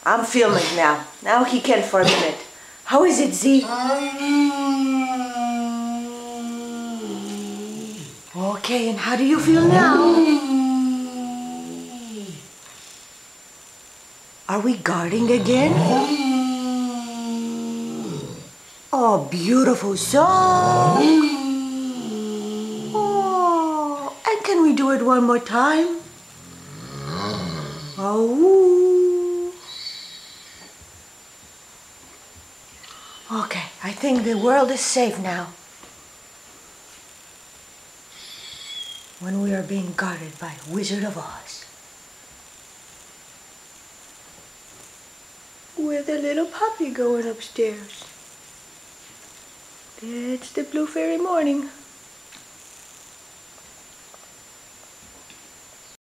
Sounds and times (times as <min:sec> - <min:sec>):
Speech: 0:00.0 - 0:06.0, 0:08.3 - 0:12.4, 0:14.5 - 0:18.1, 0:19.0 - 0:26.1, 0:28.0 - 0:29.6, 0:33.3 - 0:35.6, 0:39.2 - 0:41.7, 0:45.8 - 0:48.1, 0:50.0 - 0:51.8.